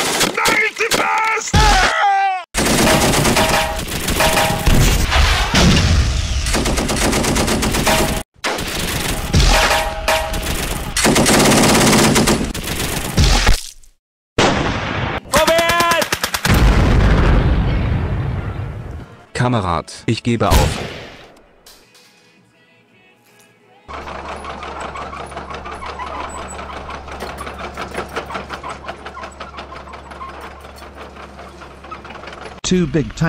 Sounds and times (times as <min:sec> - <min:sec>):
Fusillade: 0:02.6 - 0:13.5, 0:14.4 - 0:16.8.